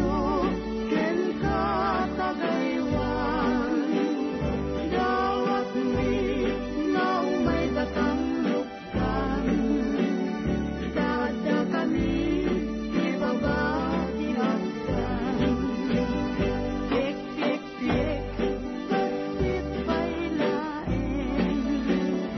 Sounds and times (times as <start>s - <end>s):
Christian music: 0.0s - 22.3s
Christmas music: 0.0s - 22.3s.